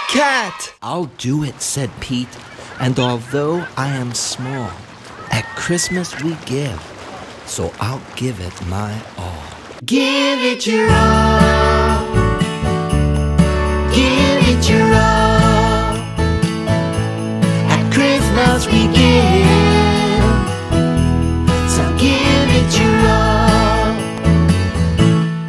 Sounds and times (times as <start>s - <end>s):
Music: 10.8s - 25.4s.